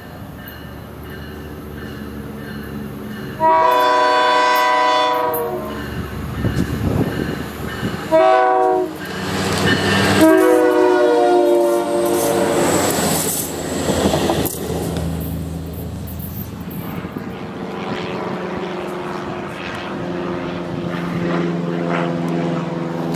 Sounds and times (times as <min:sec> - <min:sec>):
Railroad car, train wagon: 0:00.0 - 0:23.1
Subway, metro, underground: 0:00.0 - 0:23.1
Train horn: 0:03.4 - 0:05.8, 0:08.1 - 0:12.8.